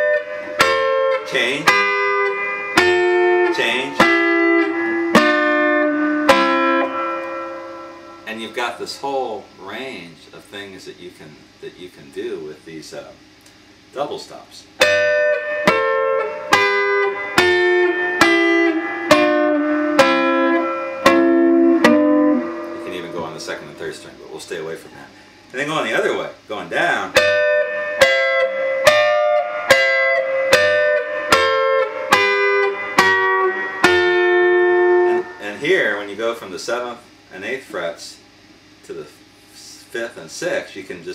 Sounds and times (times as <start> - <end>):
Blues: 0.0 - 8.4, 14.8 - 24.2, 27.1 - 35.4
Guitar: 0.0 - 41.1
Speech: 3.5 - 4.0, 8.3 - 13.2, 13.9 - 14.7, 22.8 - 27.2, 35.4 - 38.2, 38.8 - 41.1.